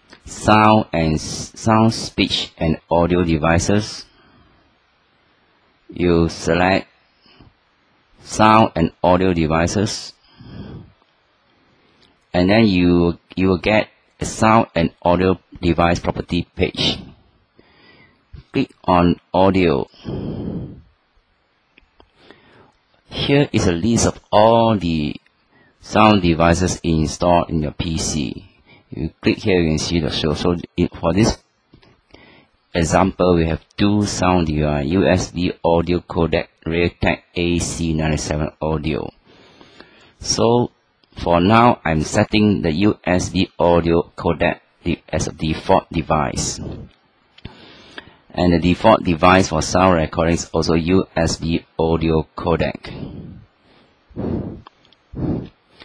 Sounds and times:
Speech: 0:00.2 - 0:04.1, 0:05.9 - 0:07.0, 0:08.2 - 0:10.2, 0:12.4 - 0:17.2, 0:18.4 - 0:20.1, 0:23.1 - 0:31.4, 0:32.7 - 0:39.2, 0:40.2 - 0:46.9, 0:48.3 - 0:53.2.

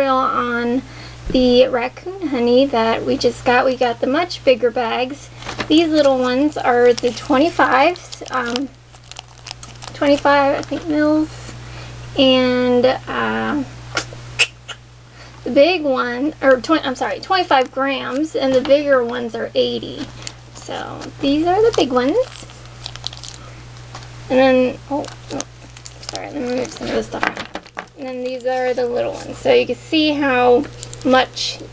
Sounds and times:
Speech: 0:00.0 - 0:08.7, 0:10.0 - 0:11.5, 0:12.2 - 0:13.7, 0:15.4 - 0:22.4, 0:24.3 - 0:25.4, 0:26.0 - 0:27.4, 0:28.0 - 0:31.7.

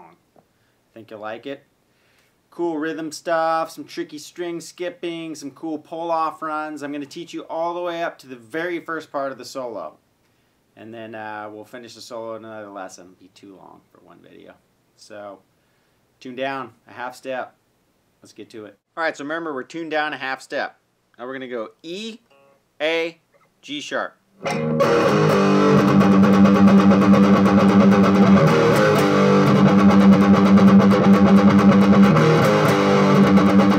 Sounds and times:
Speech: 0:01.0 - 0:01.7, 0:02.5 - 0:10.0, 0:10.8 - 0:15.4, 0:16.2 - 0:17.6, 0:18.2 - 0:22.2, 0:22.8 - 0:24.2.

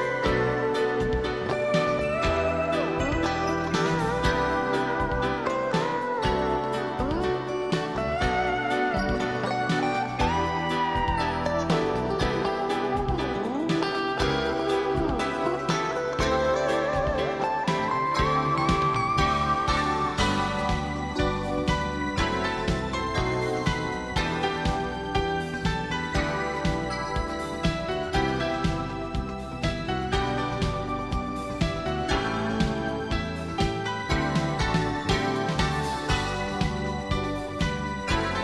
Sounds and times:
Music: 0:00.0 - 0:38.4.

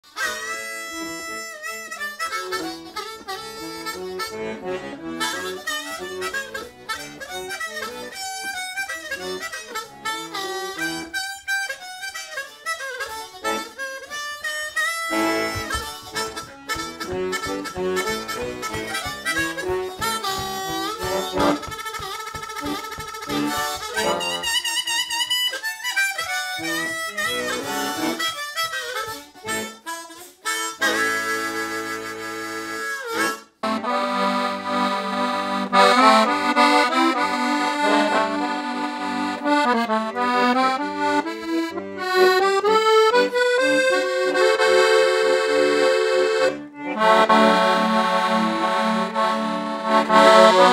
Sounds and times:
Accordion: 0:00.0 - 0:50.7
Harmonica: 0:00.0 - 0:50.7.

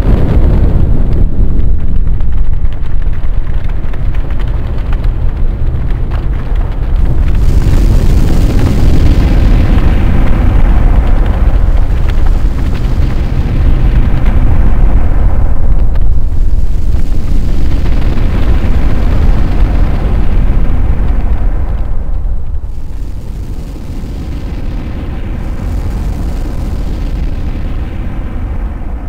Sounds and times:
Boom: 0:00.0 - 0:29.0.

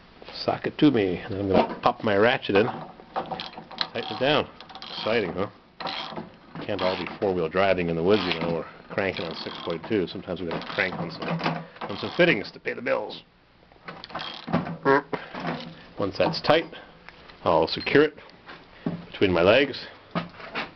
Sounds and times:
Ratchet, pawl: 0:03.2 - 0:06.2, 0:06.8 - 0:07.2, 0:08.1 - 0:10.0, 0:10.6 - 0:11.2, 0:14.0 - 0:14.6
Gears: 0:03.2 - 0:07.2, 0:08.0 - 0:12.4, 0:14.0 - 0:14.6.

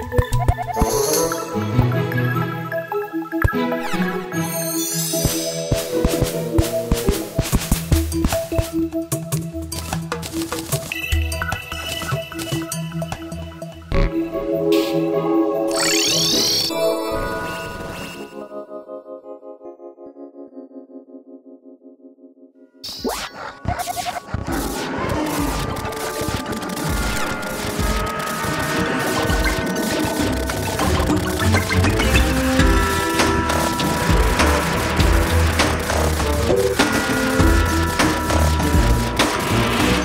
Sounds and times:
Music: 0:00.0 - 0:40.0.

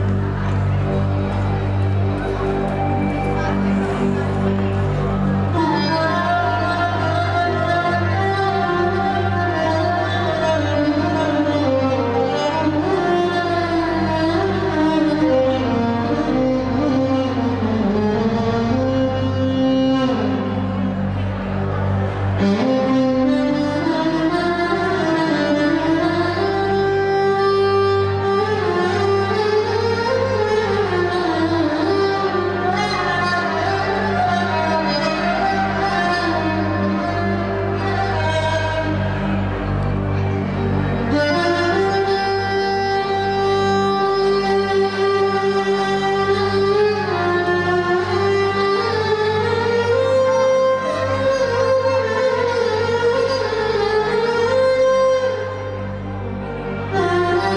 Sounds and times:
Violin, fiddle: 0:00.0 - 0:57.5.

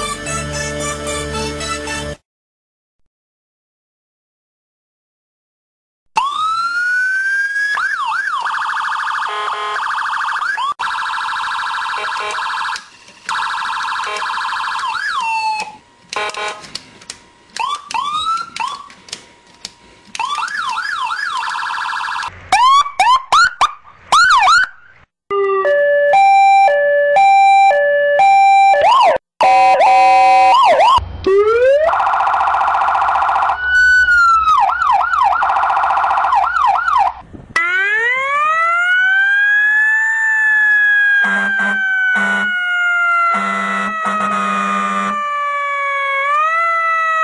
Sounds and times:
Police car (siren): 0:06.2 - 0:15.8, 0:17.6 - 0:18.9, 0:20.2 - 0:47.2.

